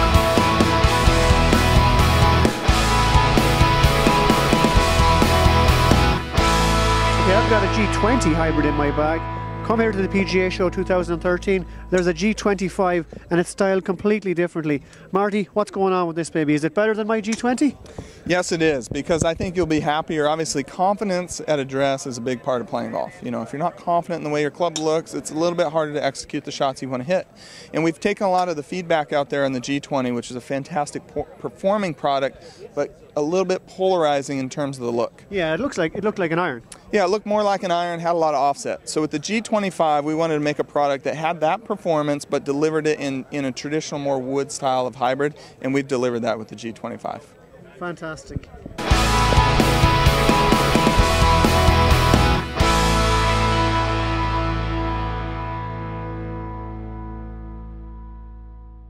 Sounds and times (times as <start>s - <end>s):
Speech: 7.2s - 48.8s.